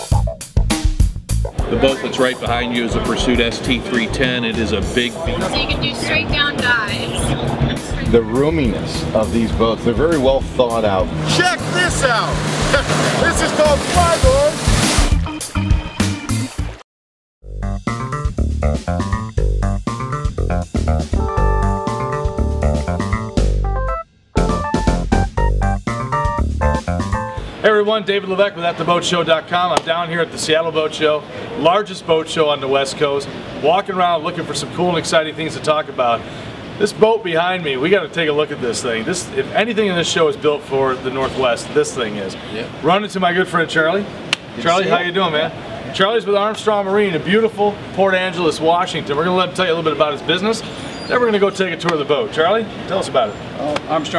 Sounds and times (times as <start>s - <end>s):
Music: 0.0s - 16.8s, 17.4s - 27.5s
Speech: 1.6s - 7.3s, 7.9s - 14.6s, 27.6s - 36.2s, 36.8s - 54.1s.